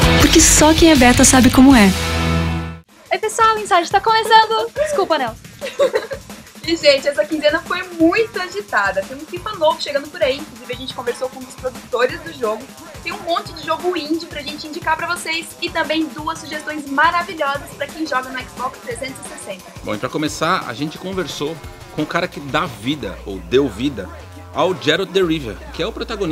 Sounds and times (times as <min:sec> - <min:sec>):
Music: 0:00.0 - 0:26.3
Speech: 0:00.2 - 0:02.0, 0:06.7 - 0:26.3.